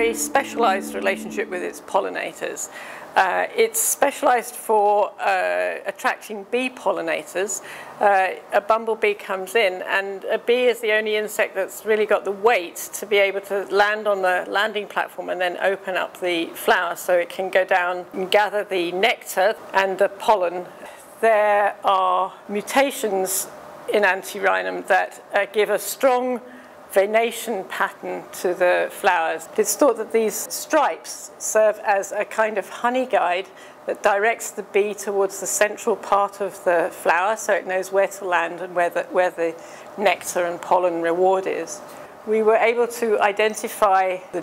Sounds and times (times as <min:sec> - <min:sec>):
Speech: 0:00.0 - 0:44.4.